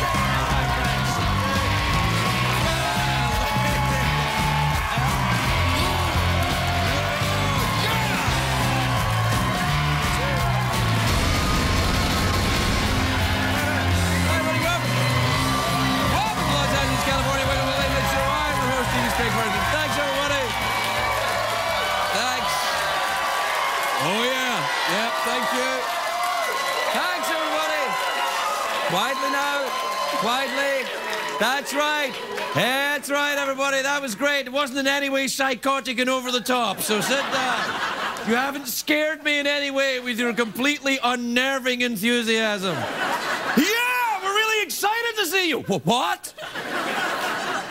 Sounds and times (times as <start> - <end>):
Music: 0.0 - 23.2.